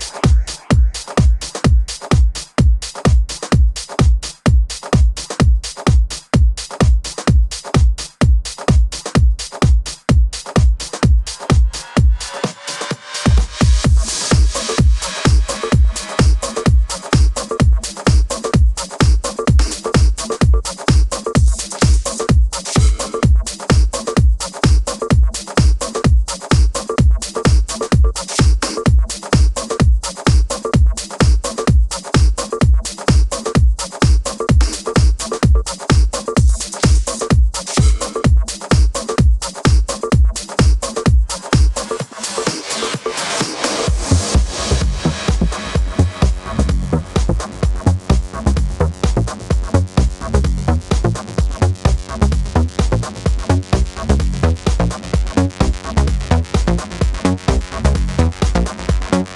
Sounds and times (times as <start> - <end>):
Pop music: 10.5 - 59.3.